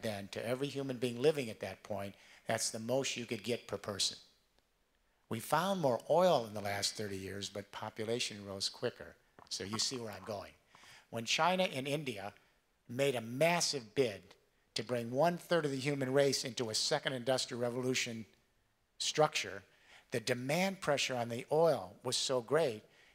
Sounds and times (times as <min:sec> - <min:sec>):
Male speech, man speaking: 0:00.0 - 0:04.2, 0:05.3 - 0:18.4, 0:19.0 - 0:22.8
Narration, monologue: 0:00.0 - 0:23.1.